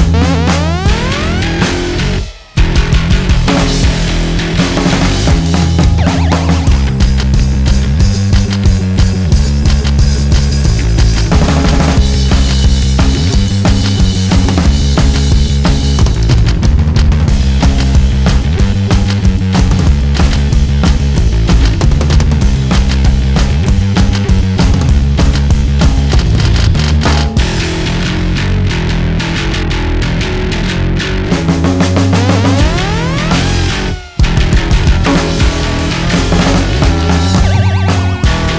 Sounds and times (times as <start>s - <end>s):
Music: 0.0s - 38.5s.